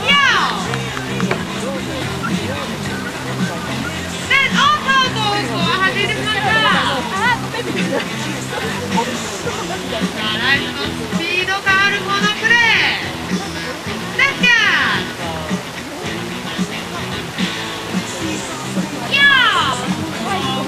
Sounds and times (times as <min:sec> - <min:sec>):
Music: 0:00.0 - 0:20.6
Speech: 0:00.0 - 0:20.6.